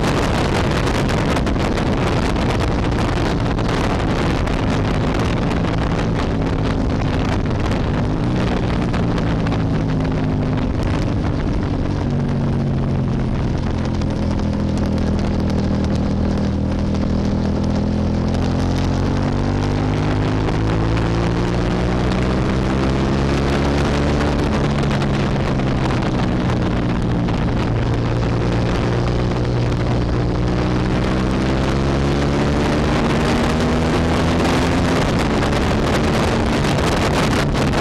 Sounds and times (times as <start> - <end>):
Motorcycle: 0.0 - 37.8.